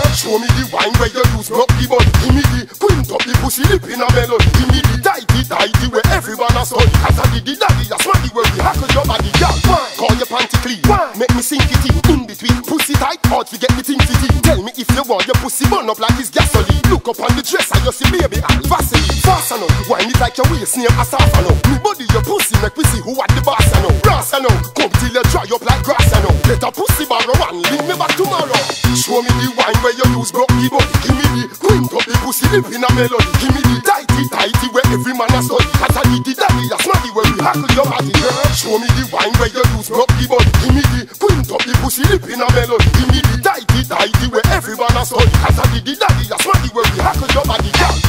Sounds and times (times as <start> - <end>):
Music: 0.0 - 48.0.